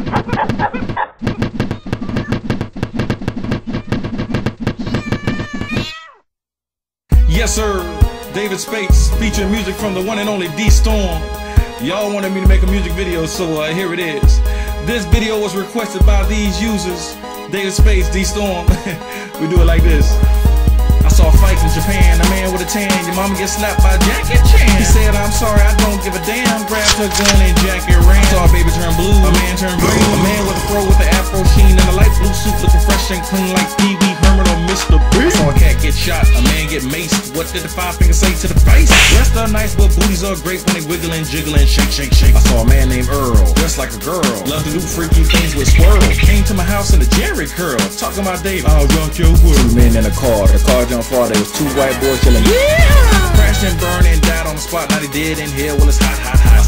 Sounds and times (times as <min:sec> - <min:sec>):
Rhythm and blues: 0:19.7 - 0:56.6
Pop music: 0:21.0 - 0:56.6.